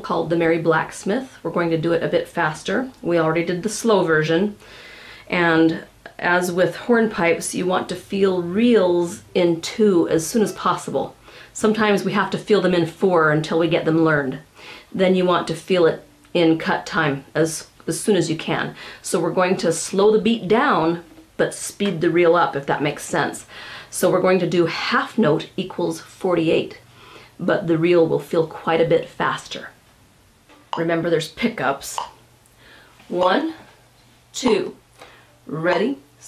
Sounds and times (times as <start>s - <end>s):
Speech: 0.0s - 4.6s, 5.3s - 29.8s, 30.8s - 32.2s, 33.1s - 34.8s, 35.4s - 36.2s.